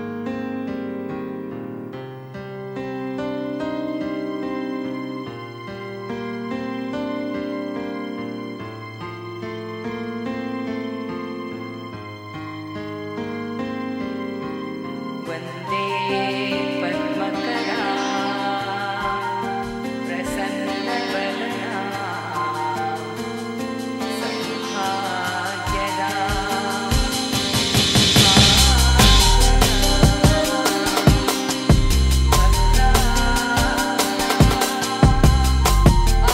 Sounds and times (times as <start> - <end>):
Music: 0.0 - 36.3.